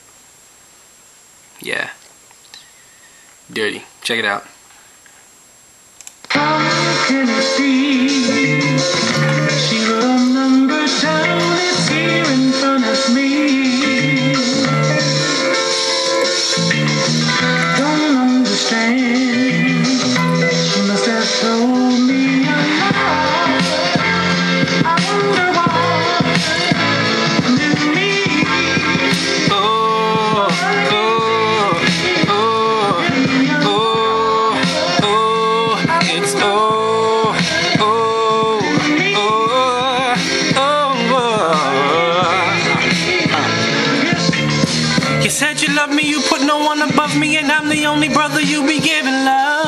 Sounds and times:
Speech: 1.6s - 2.0s, 3.5s - 4.6s
Music: 6.3s - 49.6s.

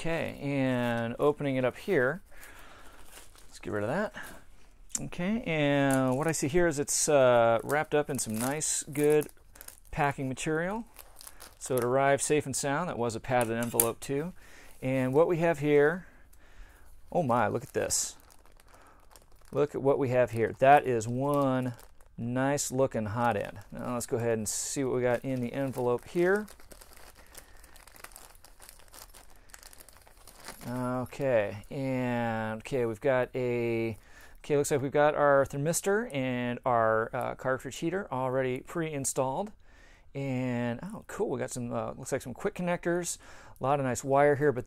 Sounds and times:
Speech: 0.0s - 2.2s, 3.5s - 4.2s, 5.0s - 9.3s, 9.9s - 10.9s, 11.6s - 16.0s, 17.1s - 18.2s, 19.5s - 26.5s, 30.6s - 39.6s, 40.2s - 44.6s
Crumpling, crinkling: 0.0s - 5.2s, 5.8s - 34.5s
Inside, small room: 0.0s - 44.6s.

